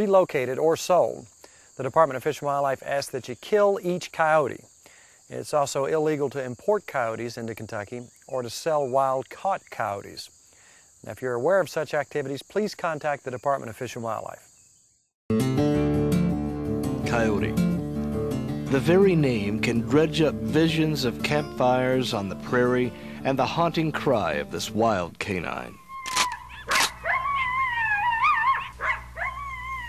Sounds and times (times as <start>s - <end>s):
Speech: 0.0s - 4.7s, 5.3s - 10.3s, 11.0s - 14.5s, 17.0s - 17.6s, 18.7s - 25.8s
Music: 15.3s - 25.8s
Canidae, dogs, wolves: 25.8s - 29.8s.